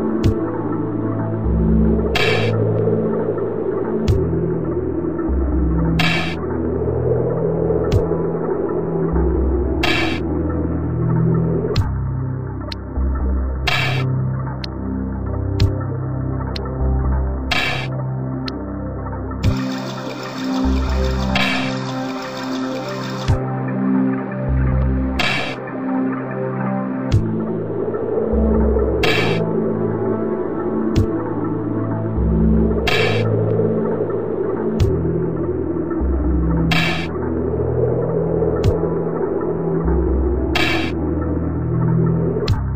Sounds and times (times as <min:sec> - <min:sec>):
Scary music: 0:00.0 - 0:42.7
Soundtrack music: 0:00.0 - 0:42.7.